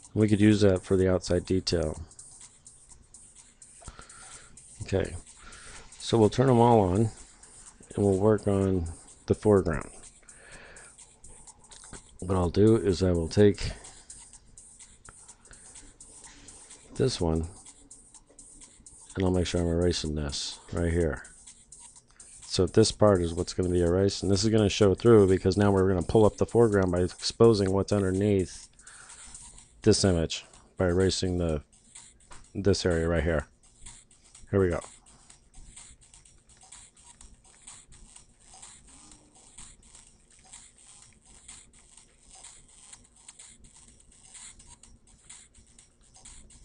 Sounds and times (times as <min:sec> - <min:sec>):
Music: 0:00.0 - 0:46.6
Speech: 0:00.2 - 0:02.0, 0:04.8 - 0:05.2, 0:06.0 - 0:07.2, 0:07.9 - 0:10.0, 0:12.2 - 0:13.8, 0:17.0 - 0:17.5, 0:19.2 - 0:21.2, 0:22.5 - 0:28.6, 0:29.8 - 0:31.6, 0:32.6 - 0:33.5, 0:34.5 - 0:34.9.